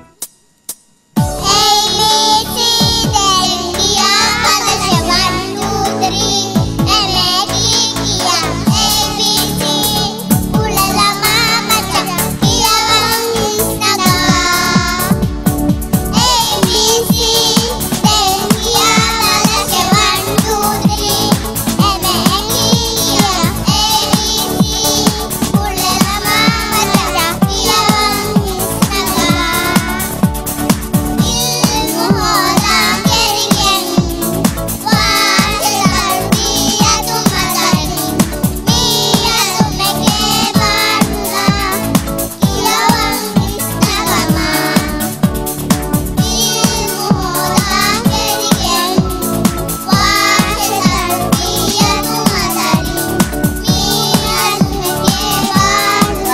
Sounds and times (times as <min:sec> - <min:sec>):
Music: 0:00.0 - 0:56.3
Child singing: 0:01.4 - 0:15.2, 0:16.1 - 0:30.2, 0:31.2 - 0:45.2, 0:46.2 - 0:56.3.